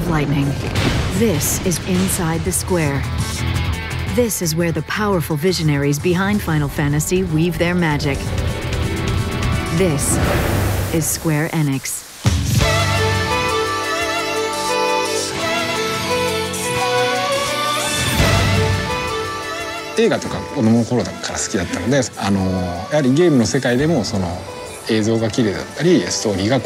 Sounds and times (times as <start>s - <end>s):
Music: 0.0s - 26.6s
Speech: 4.1s - 8.2s, 11.0s - 12.0s.